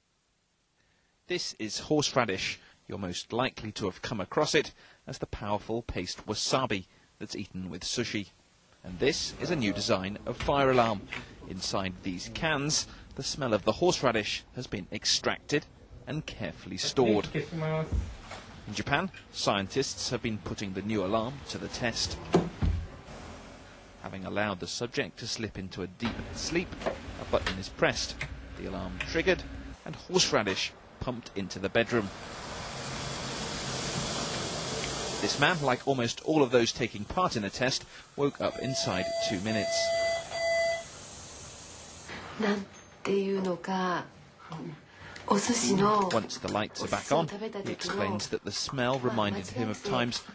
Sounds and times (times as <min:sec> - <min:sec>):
Speech: 0:01.3 - 0:18.0, 0:18.7 - 0:22.2, 0:24.0 - 0:32.1, 0:35.2 - 0:39.9, 0:44.6 - 0:50.3
Smoke detector, smoke alarm: 0:38.5 - 0:41.0.